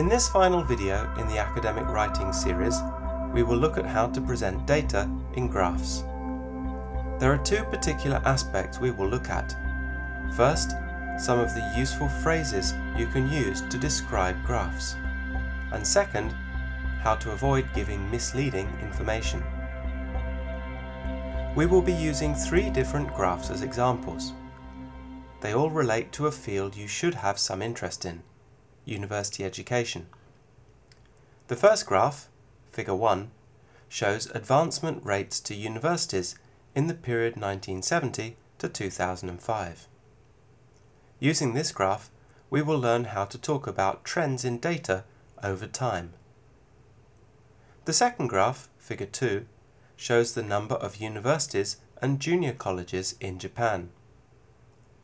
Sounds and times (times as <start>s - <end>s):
Speech: 0.0s - 6.1s, 7.2s - 9.6s, 10.4s - 15.0s, 15.7s - 16.4s, 17.0s - 19.5s, 21.6s - 24.4s, 25.4s - 28.3s, 28.9s - 30.2s, 31.5s - 39.9s, 41.2s - 46.2s, 47.8s - 54.0s.